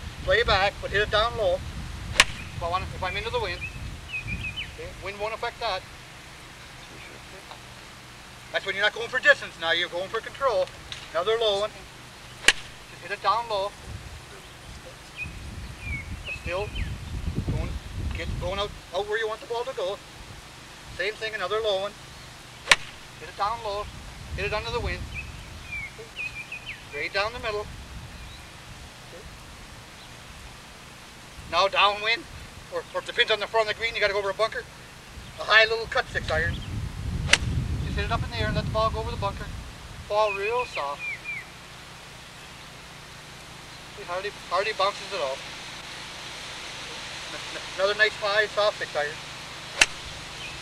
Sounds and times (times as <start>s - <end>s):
Outside, rural or natural: 0.0s - 50.6s
Speech: 0.3s - 1.6s, 2.6s - 3.7s, 4.8s - 5.8s, 6.8s - 7.6s, 8.6s - 11.9s, 12.9s - 15.2s, 16.3s - 16.8s, 17.5s - 20.0s, 21.0s - 22.0s, 23.2s - 25.0s, 27.0s - 27.7s, 31.5s - 34.7s, 35.4s - 36.6s, 37.8s - 39.5s, 40.1s - 41.0s, 44.0s - 45.4s, 46.8s - 49.2s.